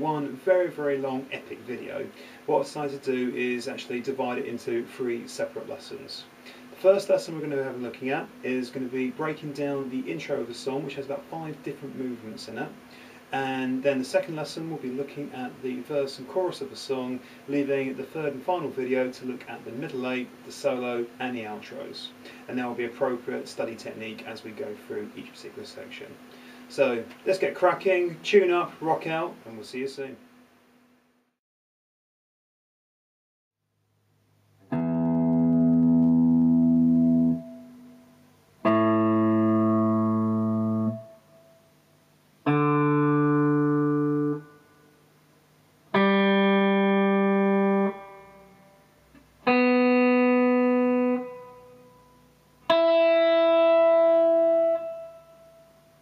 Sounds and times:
Electronic tuner: 34.2s - 56.0s
Guitar: 34.6s - 45.2s, 45.8s - 56.0s.

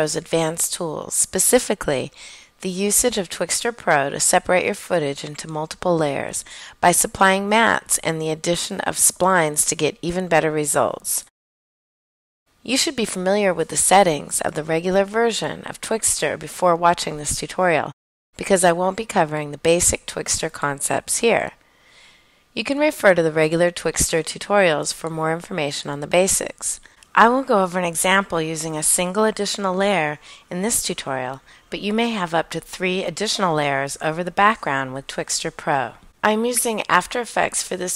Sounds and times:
Speech: 0.0s - 11.3s, 12.6s - 21.6s, 22.6s - 37.9s.

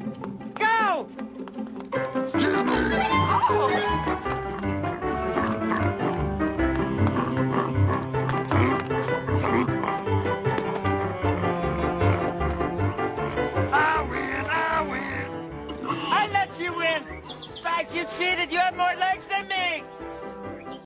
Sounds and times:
Music: 0.0s - 20.8s
Oink: 2.4s - 3.0s, 4.5s - 6.2s, 6.8s - 10.1s, 11.4s - 12.3s, 13.2s - 13.5s, 14.1s - 15.2s
Speech: 15.9s - 19.8s.

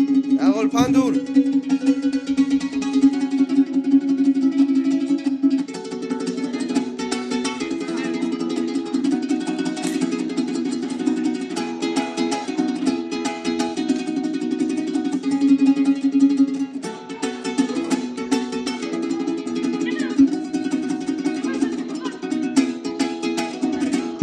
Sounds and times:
Guitar: 0.0s - 24.2s
Mandolin: 0.0s - 24.2s
Ukulele: 0.0s - 24.2s
Speech: 0.4s - 1.3s, 19.8s - 20.3s, 21.4s - 22.3s.

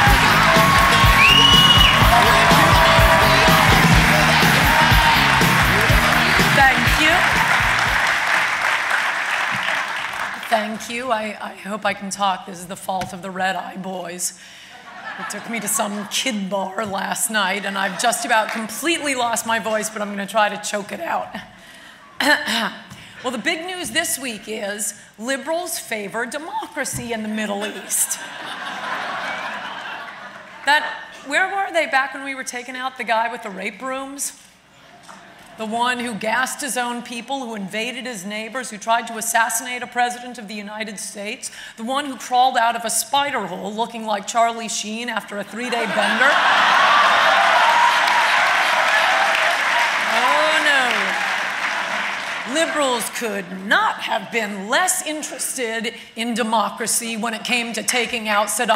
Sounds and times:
Female speech, woman speaking: 6.5s - 7.3s, 10.4s - 14.3s, 15.2s - 21.4s, 22.2s - 28.2s, 30.7s - 34.4s, 35.6s - 46.4s, 50.1s - 51.1s, 52.5s - 58.7s
Narration, monologue: 10.2s - 28.6s, 30.5s - 46.5s, 52.3s - 58.7s.

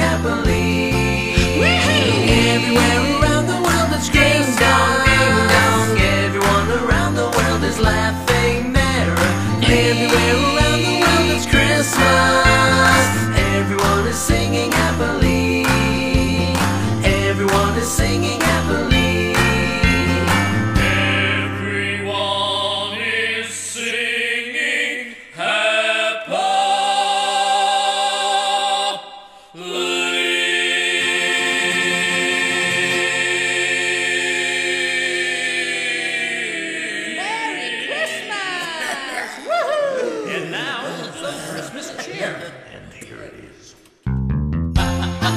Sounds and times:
Christmas music: 0.0s - 26.7s, 29.6s - 39.5s, 44.1s - 45.3s
Christian music: 0.0s - 45.3s.

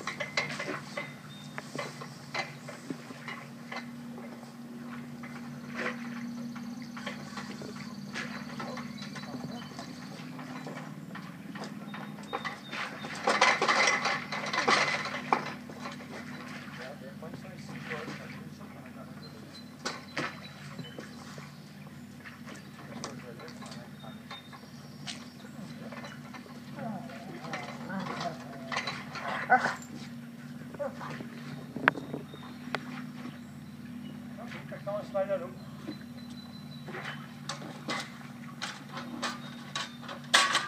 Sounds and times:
Speech: 16.7s - 19.6s, 23.0s - 24.2s, 34.4s - 35.6s.

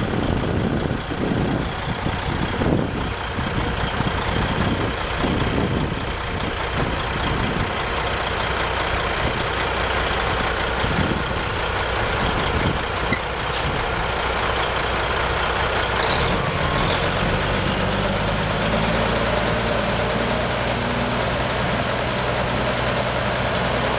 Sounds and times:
Truck: 0.0s - 23.9s.

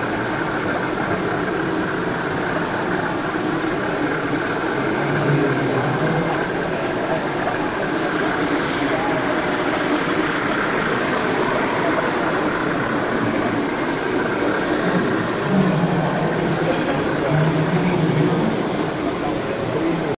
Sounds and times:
Printer: 0.0s - 20.1s
Speech: 4.8s - 20.1s.

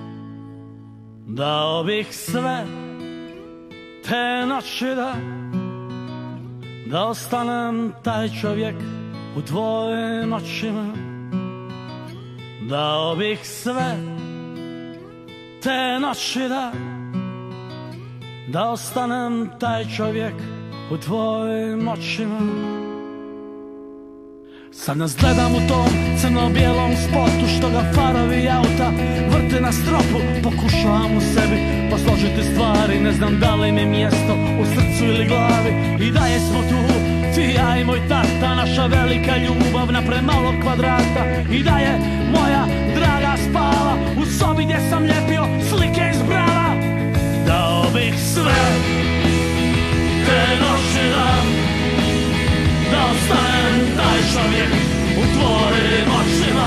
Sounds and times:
Independent music: 19.5s - 56.6s.

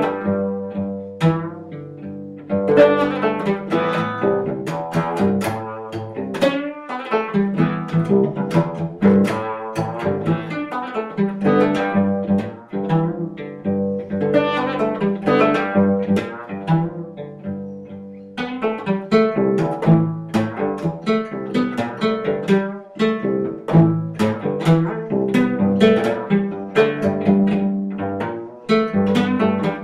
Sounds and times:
Cello: 0.0s - 29.8s
Mandolin: 0.0s - 29.8s.

